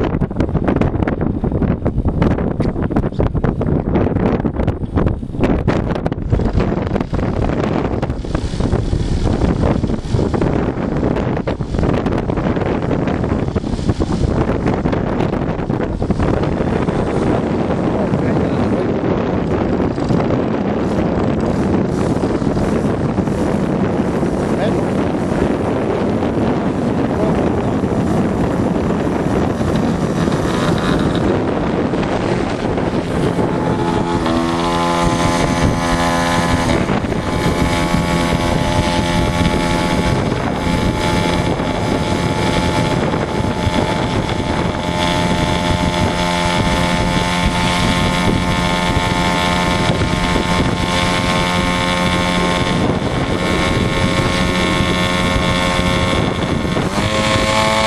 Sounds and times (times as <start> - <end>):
Vehicle: 0.0 - 57.8
Speech: 18.0 - 18.9, 24.6 - 25.6.